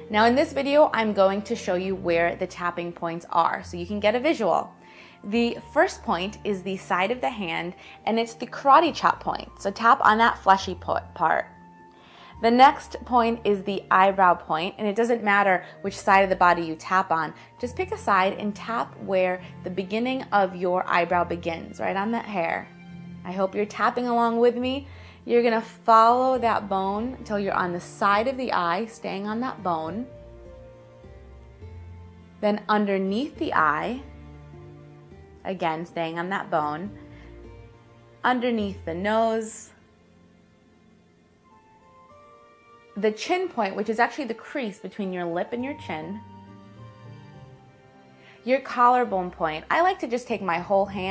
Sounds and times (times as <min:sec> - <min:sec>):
Music: 0:00.0 - 0:51.1.